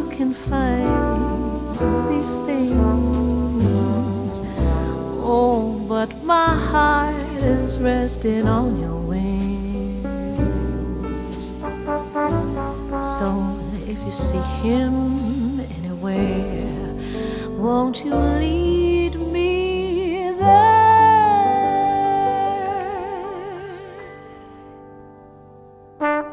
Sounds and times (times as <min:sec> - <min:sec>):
Tender music: 0:00.0 - 0:26.3.